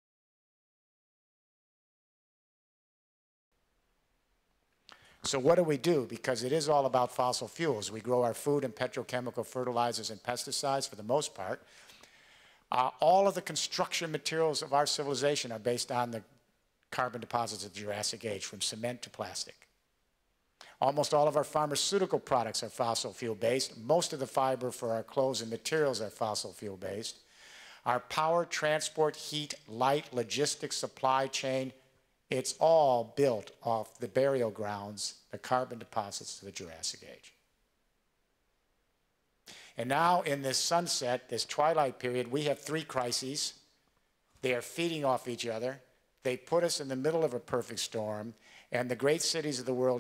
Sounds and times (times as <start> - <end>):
Narration, monologue: 3.6 - 50.0
Male speech, man speaking: 5.3 - 11.6, 12.7 - 16.3, 16.9 - 19.6, 20.8 - 27.2, 27.9 - 37.4, 39.8 - 43.6, 44.4 - 50.0.